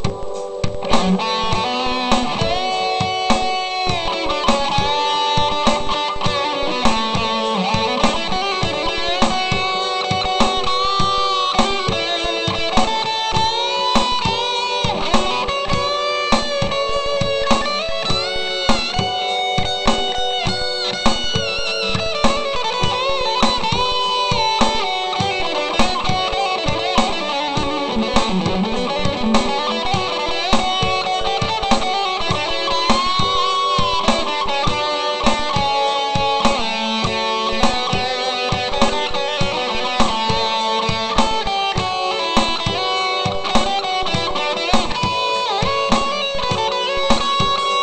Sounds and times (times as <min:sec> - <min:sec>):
Electric guitar: 0:00.0 - 0:47.8
Strum: 0:19.7 - 0:47.8.